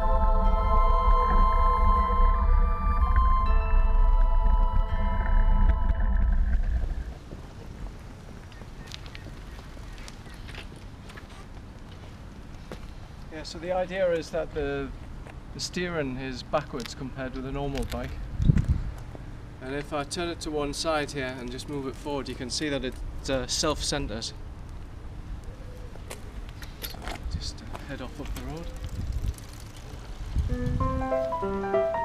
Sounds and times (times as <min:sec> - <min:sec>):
Bicycle: 0:00.2 - 0:13.3, 0:26.0 - 0:31.5
Speech: 0:13.3 - 0:15.0, 0:15.6 - 0:18.2, 0:19.6 - 0:24.4, 0:27.3 - 0:28.8.